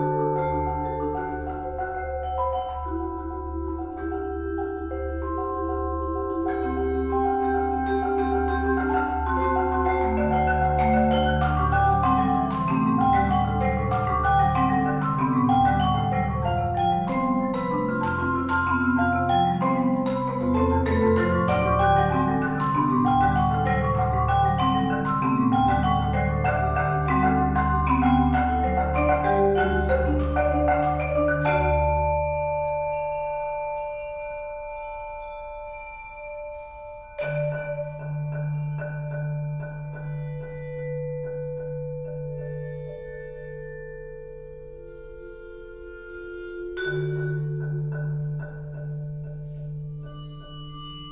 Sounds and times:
Glockenspiel: 0.0s - 51.1s
Marimba, xylophone: 0.0s - 51.1s.

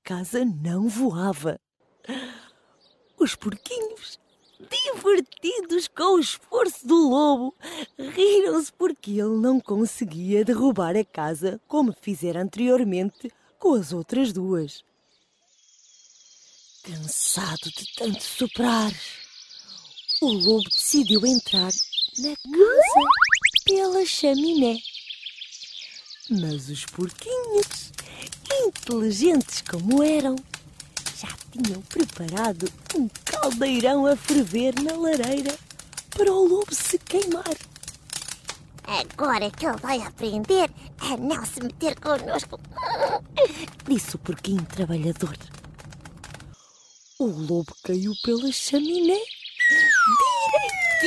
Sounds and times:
Speech: 0.0s - 1.6s, 3.2s - 14.8s, 16.9s - 19.2s, 20.2s - 24.8s, 26.3s - 30.4s, 31.1s - 35.6s, 36.2s - 37.6s, 38.9s - 42.6s, 43.4s - 45.5s, 47.2s - 51.0s.

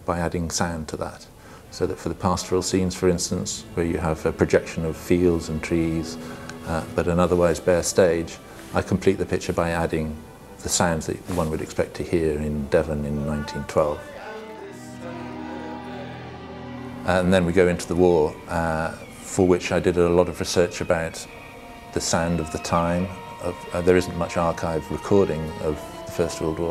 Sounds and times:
Speech: 0.0s - 14.2s, 17.1s - 21.3s, 22.0s - 26.7s
Music: 1.8s - 26.7s.

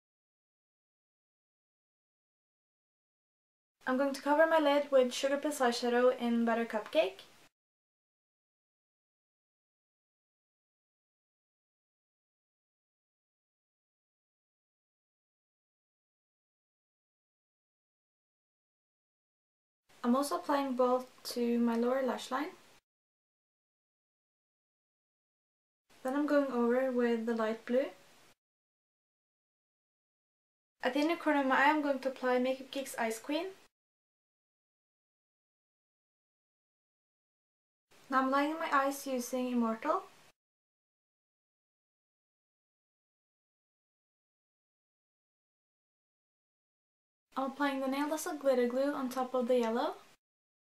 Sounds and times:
Speech: 3.8s - 7.3s, 20.0s - 22.6s, 26.0s - 28.0s, 30.8s - 33.7s, 38.1s - 40.1s, 47.4s - 50.1s.

